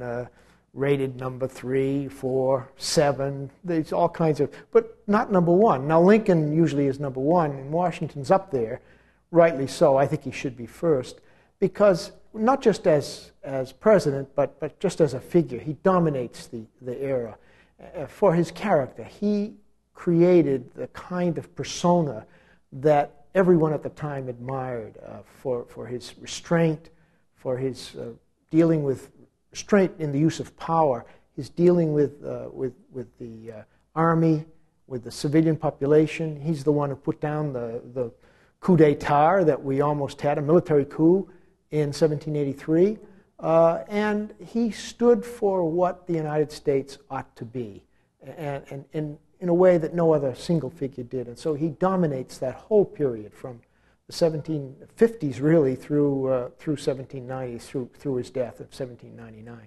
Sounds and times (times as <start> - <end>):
Speech: 0.0 - 59.6.